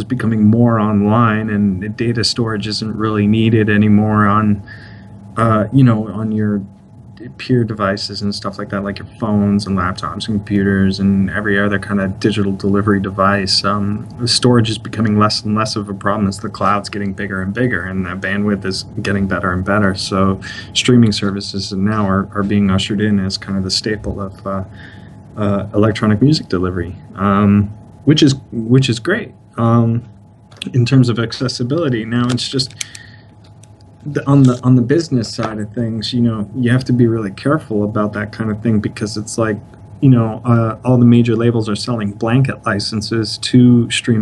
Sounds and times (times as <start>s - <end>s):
Speech: 0.0s - 24.8s, 25.4s - 32.9s, 34.0s - 44.2s.